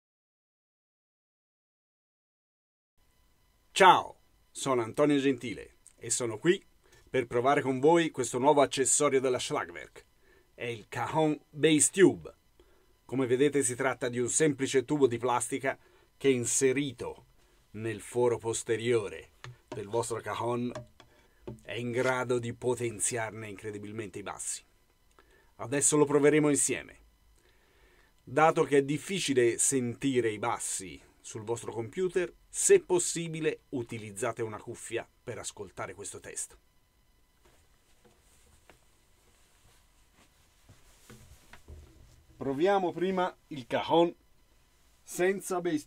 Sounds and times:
Speech: 3.7s - 10.0s, 10.6s - 12.4s, 13.1s - 20.8s, 21.6s - 24.7s, 25.6s - 27.0s, 28.3s - 36.6s, 42.4s - 44.2s, 45.1s - 45.8s.

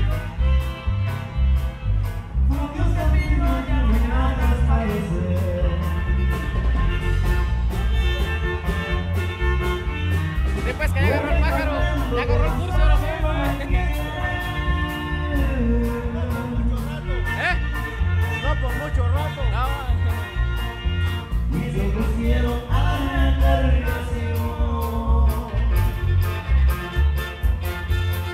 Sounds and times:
Speech: 10.6s - 14.0s, 18.4s - 20.3s.

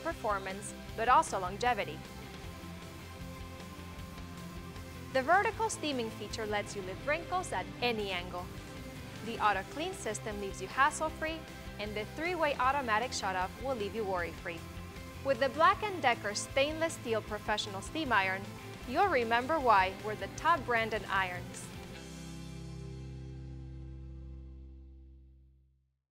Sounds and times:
Speech: 0.0s - 2.0s, 5.2s - 8.5s, 9.2s - 14.6s, 15.3s - 21.7s
Music: 0.0s - 25.8s.

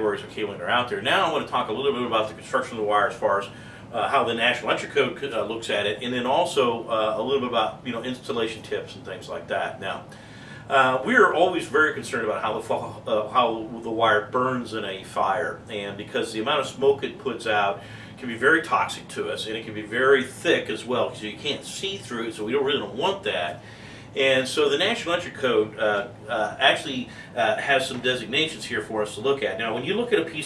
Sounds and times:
Speech: 0.0s - 10.1s, 10.7s - 23.6s, 24.2s - 30.4s.

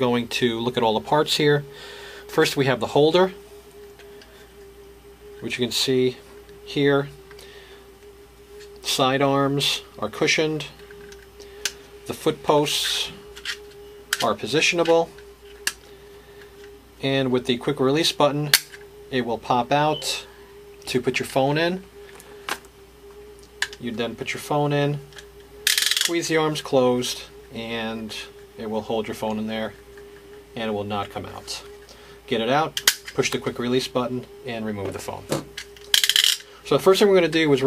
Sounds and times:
Speech: 0.0s - 1.7s, 2.3s - 3.4s, 5.4s - 7.1s, 8.8s - 10.8s, 12.1s - 13.2s, 14.2s - 15.1s, 17.0s - 18.5s, 19.1s - 20.3s, 20.9s - 21.9s, 23.8s - 25.0s, 26.1s - 29.8s, 30.6s - 31.7s, 32.3s - 35.4s, 36.6s - 37.6s
Inside, small room: 0.0s - 37.6s.

